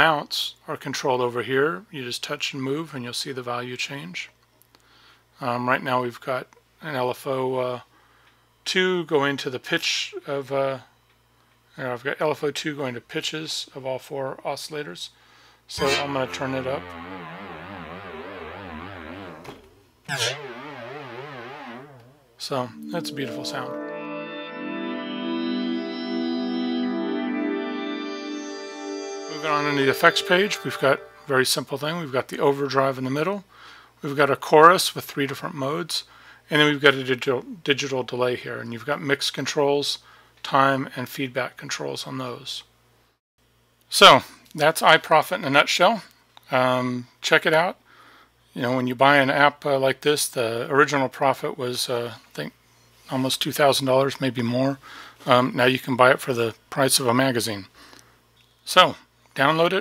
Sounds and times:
Speech: 0.0s - 4.4s, 5.4s - 7.9s, 8.6s - 10.9s, 11.8s - 17.0s, 20.1s - 20.4s, 22.4s - 23.8s, 29.4s - 42.7s, 43.9s - 47.8s, 48.6s - 57.7s, 58.6s - 59.8s
Inside, small room: 0.0s - 59.8s
Synthesizer: 15.8s - 31.5s.

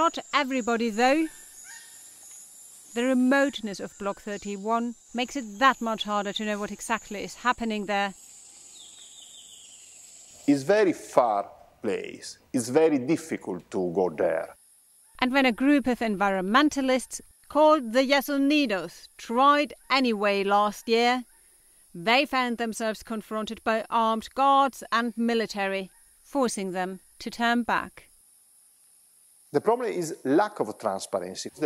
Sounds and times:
Speech: 10.5s - 14.6s, 29.6s - 31.6s.

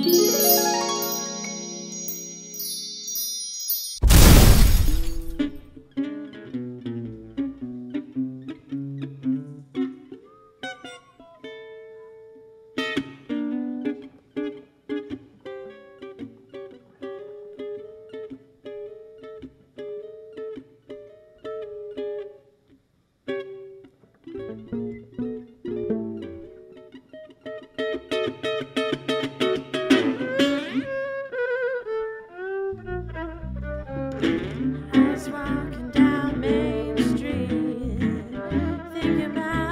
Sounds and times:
Violin, fiddle: 30.4s - 37.5s, 38.1s - 39.7s.

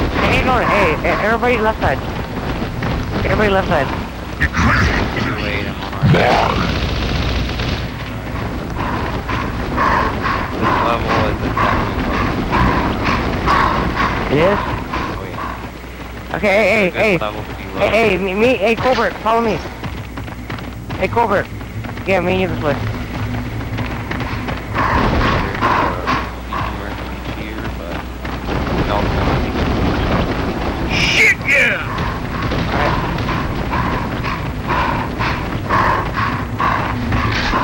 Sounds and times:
Speech: 0.2s - 2.0s, 3.3s - 6.7s, 10.6s - 11.4s, 14.3s - 15.4s, 16.4s - 19.7s, 25.4s - 28.0s, 30.9s - 32.0s.

